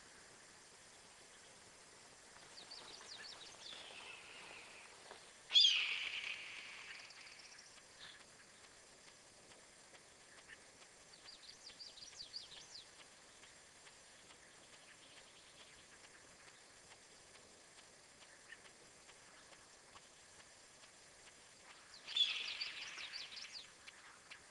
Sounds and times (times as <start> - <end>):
Bird vocalization, bird call, bird song: 2.5 - 8.8, 10.1 - 17.0, 18.2 - 20.4, 21.6 - 24.5.